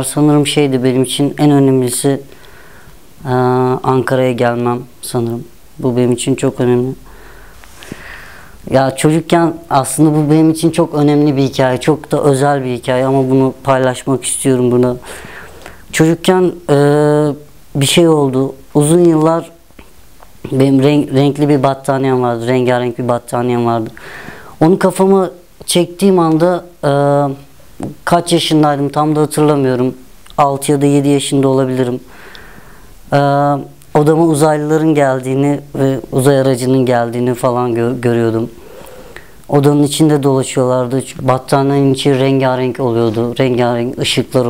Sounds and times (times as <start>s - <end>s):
Speech: 0.0s - 2.3s, 3.2s - 7.1s, 8.6s - 15.2s, 15.9s - 24.0s, 24.6s - 32.1s, 33.1s - 38.6s, 39.5s - 44.5s.